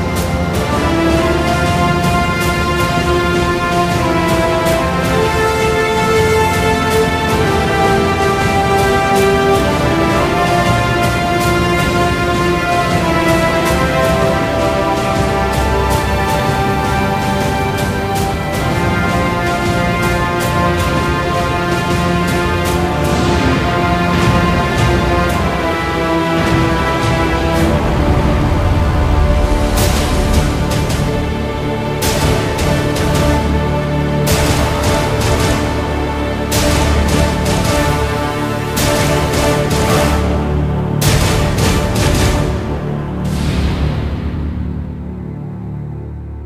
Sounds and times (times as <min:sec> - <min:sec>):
Music: 0:00.0 - 0:46.4.